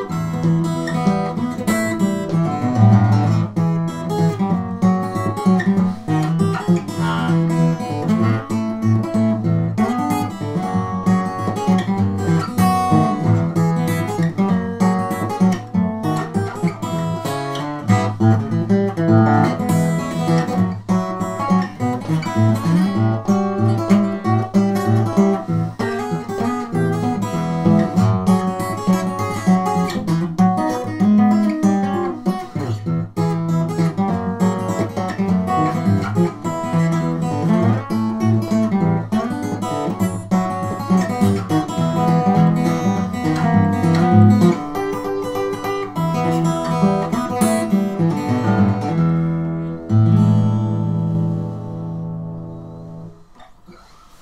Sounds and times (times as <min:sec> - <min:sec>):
Acoustic guitar: 0:00.0 - 0:54.2
Strum: 0:00.0 - 0:54.2.